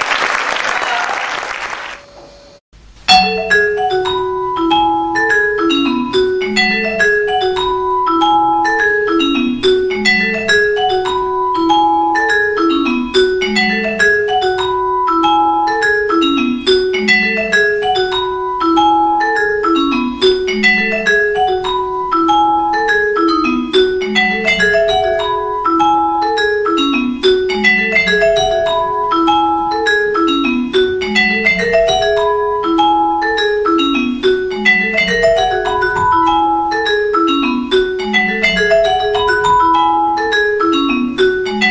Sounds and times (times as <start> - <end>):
Marimba, xylophone: 3.1 - 41.7.